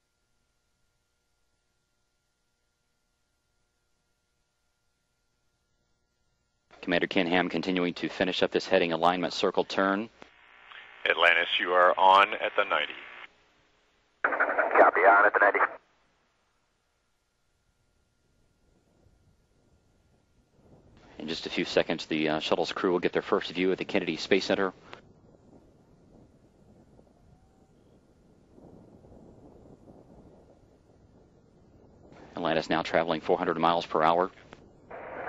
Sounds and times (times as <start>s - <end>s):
Radio: 9.4s - 13.3s, 14.3s - 15.8s, 34.9s - 35.2s.